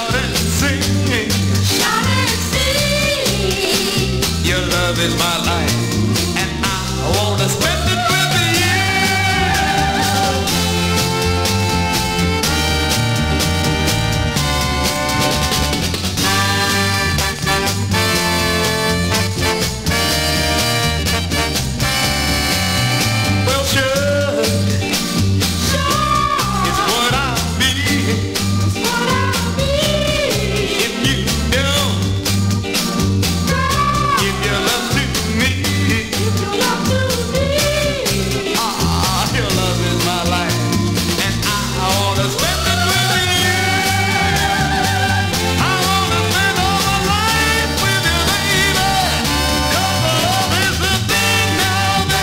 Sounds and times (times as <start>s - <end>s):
Music: 0.0s - 52.2s.